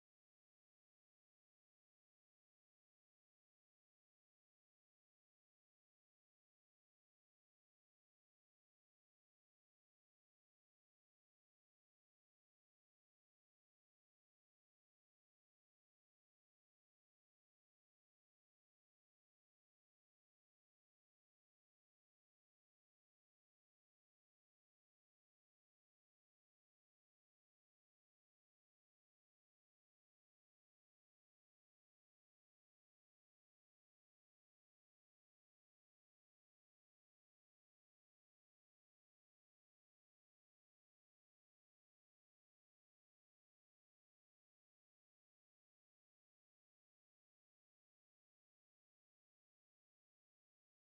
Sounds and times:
Music: 0.0 - 50.8.

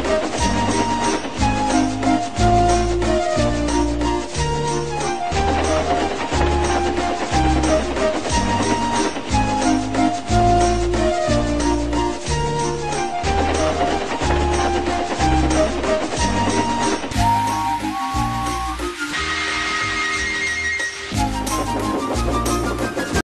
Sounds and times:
Music: 0.0 - 23.2.

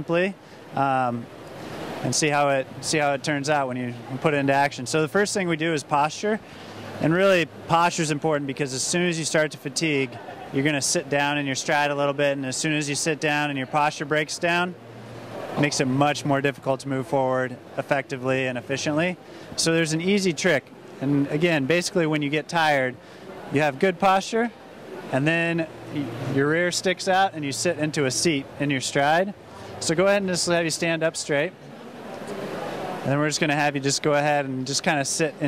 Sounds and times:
Speech: 0.0 - 1.3, 2.0 - 6.4, 7.0 - 14.8, 15.6 - 31.6, 33.0 - 35.4
Inside, public space: 0.0 - 35.4.

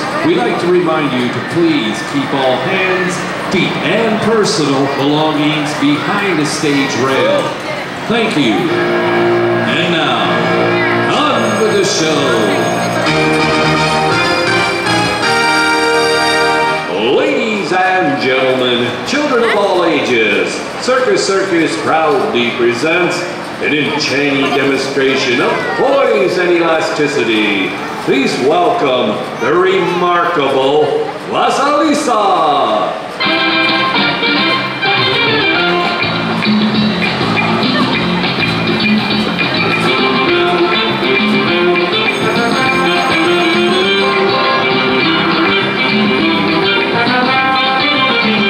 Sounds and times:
Speech: 0.0 - 8.8, 9.7 - 10.4, 11.0 - 12.8, 16.9 - 33.0.

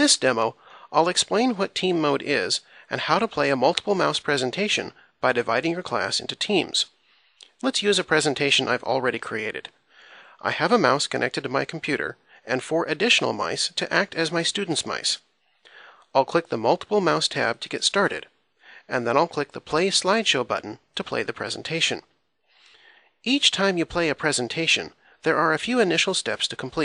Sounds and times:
Speech: 0.0 - 7.0, 7.6 - 9.8, 10.4 - 15.3, 16.1 - 22.1, 23.2 - 26.8.

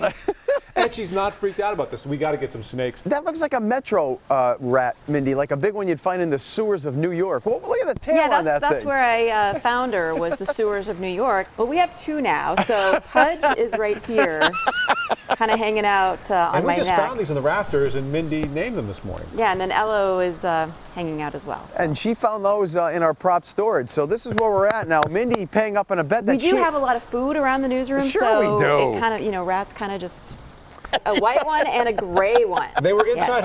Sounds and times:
Speech: 28.0 - 29.1, 31.0 - 33.4.

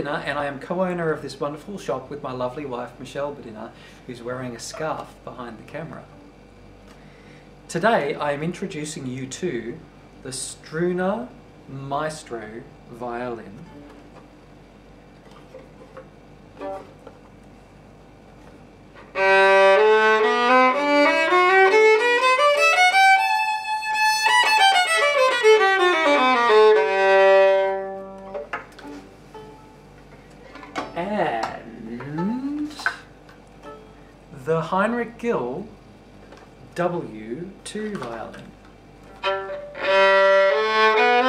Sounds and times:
Violin, fiddle: 19.1 - 28.5, 39.2 - 41.2.

